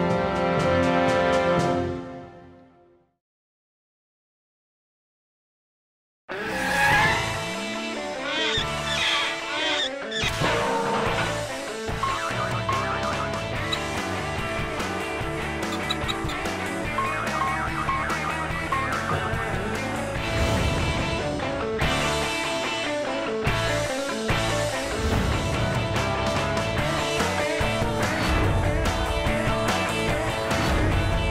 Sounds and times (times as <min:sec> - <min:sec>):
Music: 0:00.0 - 0:03.2, 0:06.8 - 0:31.3.